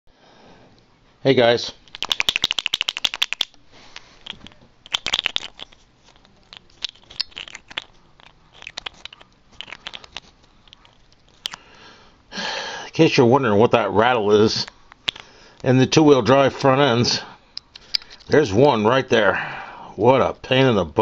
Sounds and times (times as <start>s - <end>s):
Speech: 1.2s - 1.8s, 12.9s - 14.7s, 15.6s - 17.4s, 18.3s - 19.4s, 20.0s - 21.0s
Rattle: 1.9s - 11.6s, 17.6s - 18.4s.